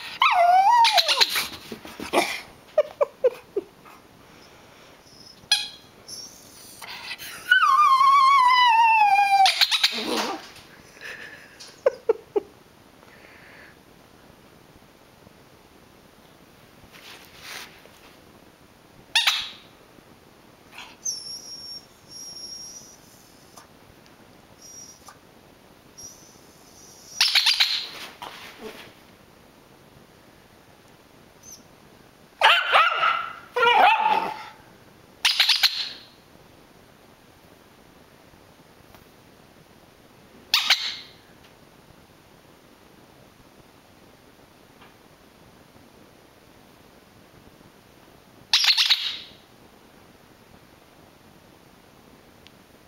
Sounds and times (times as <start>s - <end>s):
Yip: 0.1s - 1.4s, 5.2s - 6.4s, 7.5s - 10.5s, 19.2s - 19.6s, 27.1s - 28.0s, 32.4s - 34.6s, 35.2s - 36.1s, 40.5s - 41.2s, 48.5s - 49.3s
Bark: 32.4s - 34.6s.